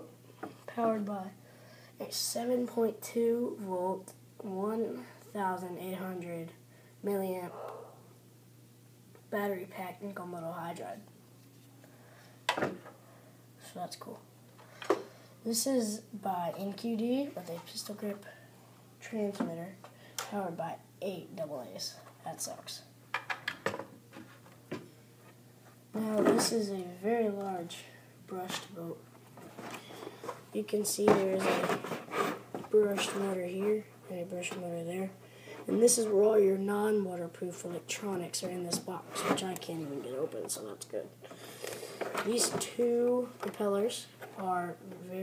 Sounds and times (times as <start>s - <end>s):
Speech: 0.7s - 1.4s, 2.0s - 7.5s, 9.3s - 11.1s, 13.6s - 14.3s, 15.4s - 18.4s, 19.0s - 22.9s, 25.9s - 29.0s, 30.5s - 31.9s, 32.6s - 41.2s, 42.2s - 45.2s.